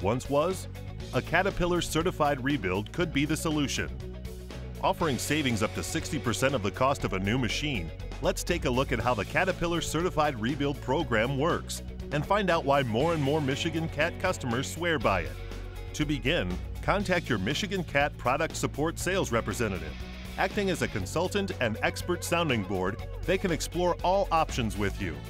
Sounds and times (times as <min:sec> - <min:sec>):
Speech: 0:00.0 - 0:03.9, 0:04.8 - 0:15.4, 0:16.0 - 0:25.2
Music: 0:00.0 - 0:25.2.